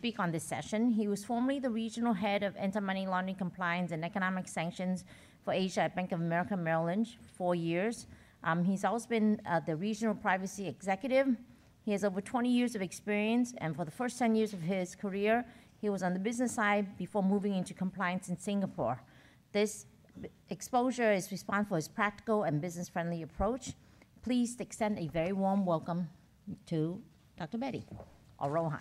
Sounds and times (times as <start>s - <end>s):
Female speech, woman speaking: 0.0s - 19.0s, 19.6s - 28.8s
Narration, monologue: 0.0s - 28.8s.